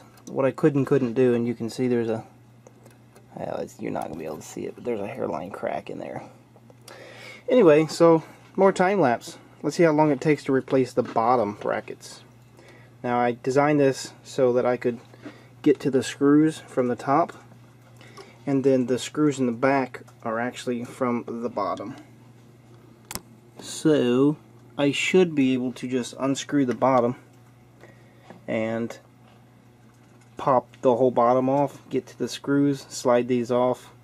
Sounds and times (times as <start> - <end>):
Speech: 0.3 - 2.4, 3.3 - 6.4, 7.5 - 12.3, 13.0 - 17.5, 18.5 - 22.1, 23.6 - 27.3, 28.5 - 29.1, 30.4 - 34.0.